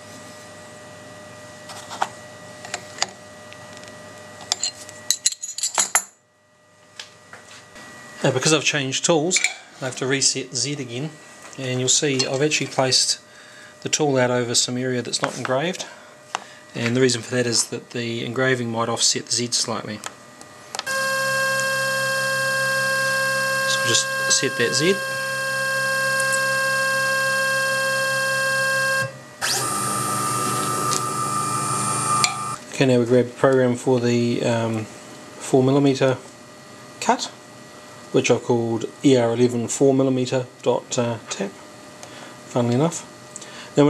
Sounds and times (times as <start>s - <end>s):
Speech: 8.2s - 13.2s, 13.8s - 16.0s, 16.8s - 20.1s, 23.7s - 25.0s, 32.7s - 36.2s, 37.0s - 37.4s, 38.1s - 41.6s, 42.5s - 43.1s.